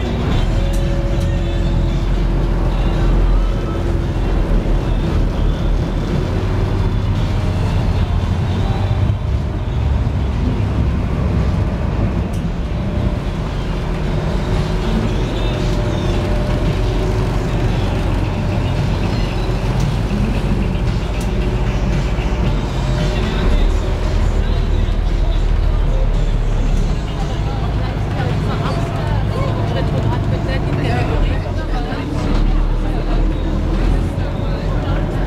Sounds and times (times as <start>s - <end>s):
Motorboat, speedboat: 0.0s - 35.2s.